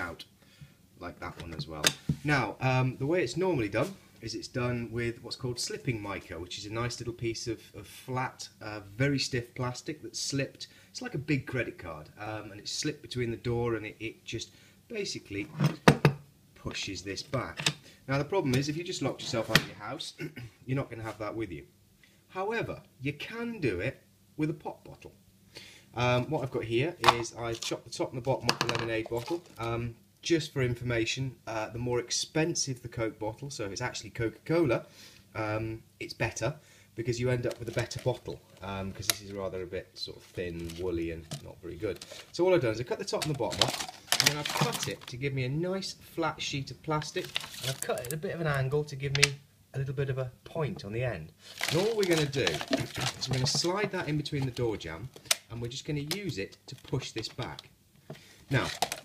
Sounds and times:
Speech: 0.0 - 0.3, 1.0 - 15.8, 16.6 - 21.7, 22.3 - 25.2, 26.0 - 57.7, 58.5 - 58.8.

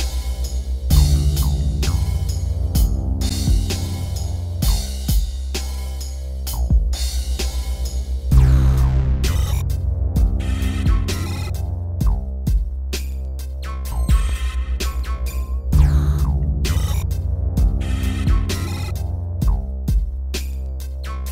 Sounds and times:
Music: 0.0 - 21.3.

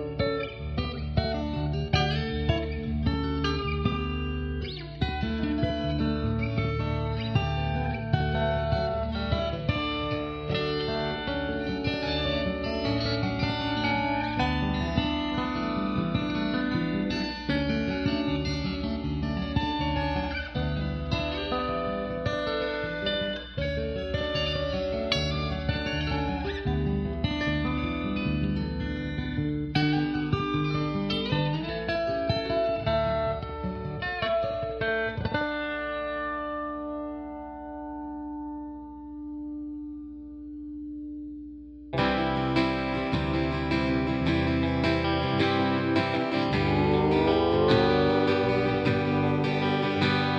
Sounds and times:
Steel guitar, slide guitar: 0.0 - 40.0, 42.0 - 50.3.

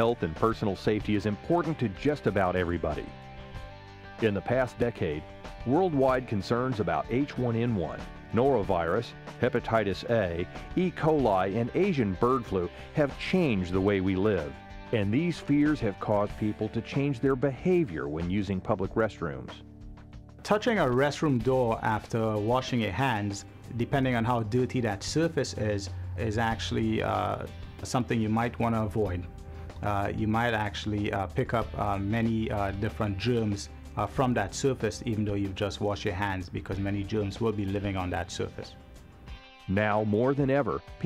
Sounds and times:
Speech: 0.0 - 3.1, 4.2 - 19.6, 20.4 - 38.8, 39.7 - 41.0
Music: 0.0 - 41.0.

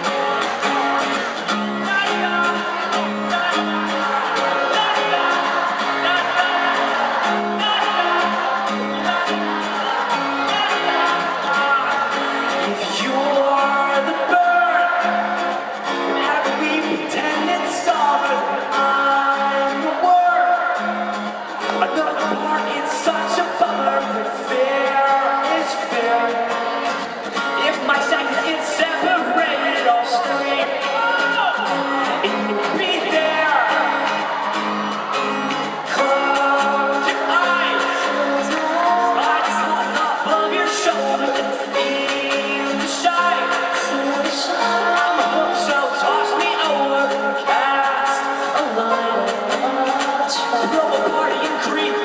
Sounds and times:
Music: 0.0 - 52.0.

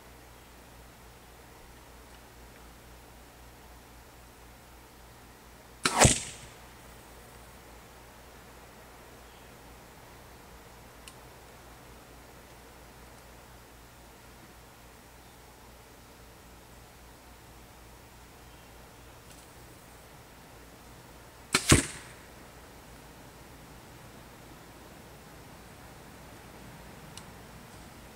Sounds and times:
Arrow: 5.8 - 6.6, 21.5 - 22.3.

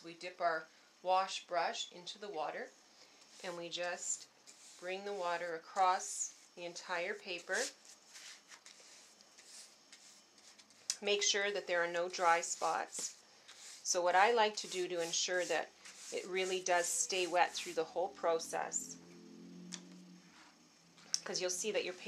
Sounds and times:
Speech: 11.0 - 13.0, 13.9 - 18.9, 21.2 - 22.0.

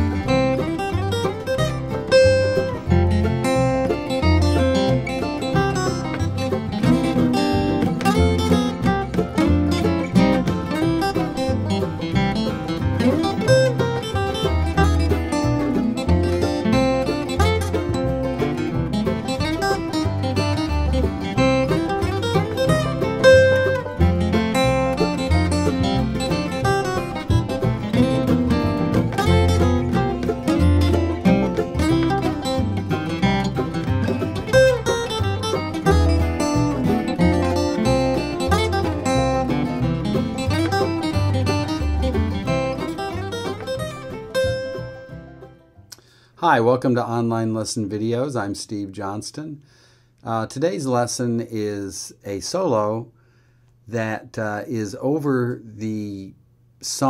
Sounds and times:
Guitar: 0.0 - 57.0.

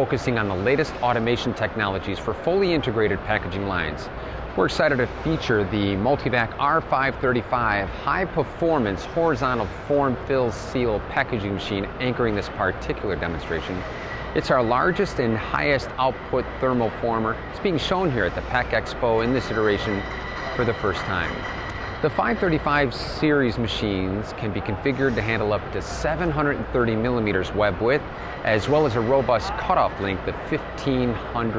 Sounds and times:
Speech: 0.0 - 20.0, 20.6 - 21.4, 22.0 - 31.5.

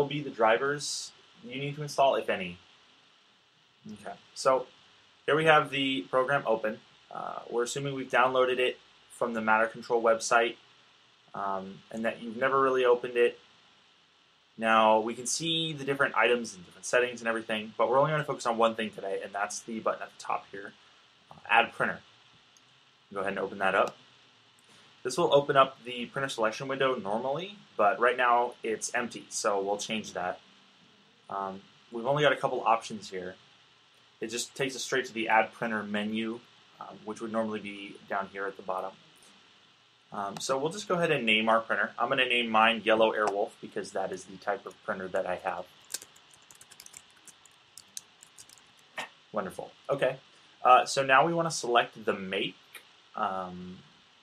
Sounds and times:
Speech: 0.0 - 2.7, 3.9 - 4.7, 5.3 - 10.6, 11.4 - 13.4, 14.6 - 22.0, 23.1 - 23.9, 25.1 - 30.4, 31.3 - 33.4, 34.2 - 39.0, 40.1 - 45.7, 49.4 - 53.8.

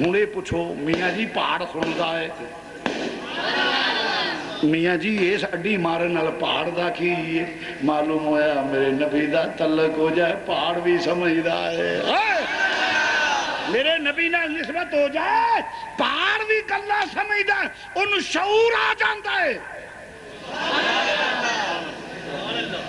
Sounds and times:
Male speech, man speaking: 0.0 - 2.6, 4.6 - 12.4, 13.7 - 19.6, 22.3 - 22.8
Narration, monologue: 0.0 - 3.3, 4.6 - 12.5, 13.7 - 20.5.

